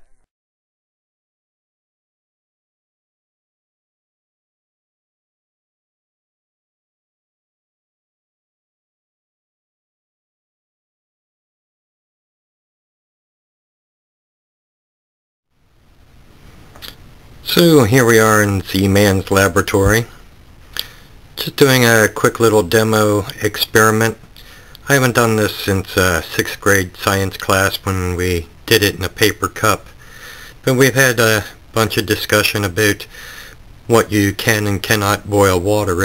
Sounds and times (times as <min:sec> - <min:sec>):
Speech: 0:16.8 - 0:20.2, 0:21.4 - 0:30.0, 0:30.6 - 0:33.2, 0:33.9 - 0:36.0.